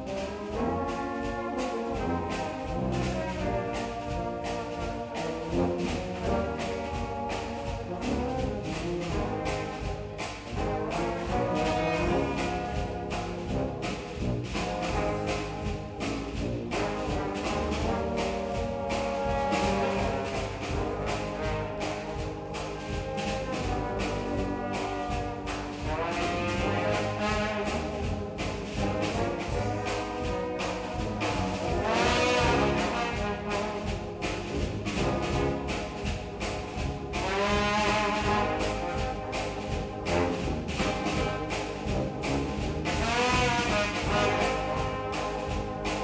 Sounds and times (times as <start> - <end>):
Music: 0.0 - 46.0.